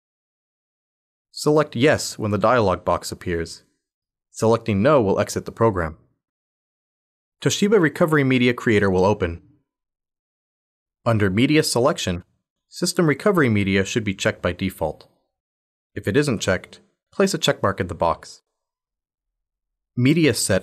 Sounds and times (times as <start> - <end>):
Speech: 1.4 - 3.7, 4.4 - 6.1, 7.4 - 9.5, 11.1 - 15.1, 16.0 - 18.4, 20.0 - 20.6.